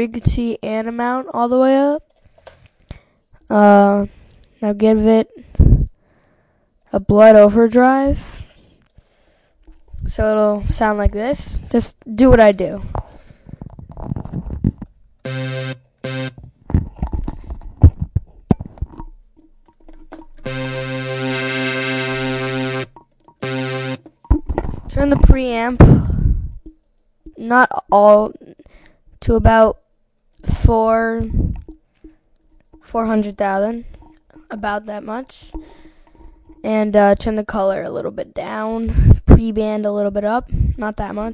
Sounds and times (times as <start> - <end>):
Electronic music: 15.2 - 16.5, 19.7 - 25.9
Synthesizer: 15.2 - 17.9, 19.7 - 26.7.